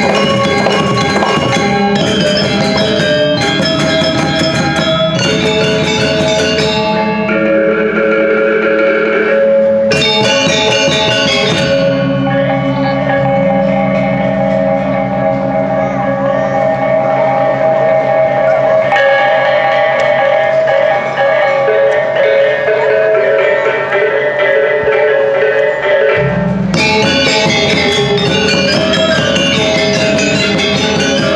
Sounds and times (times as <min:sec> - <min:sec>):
Bell: 0:00.0 - 0:31.3.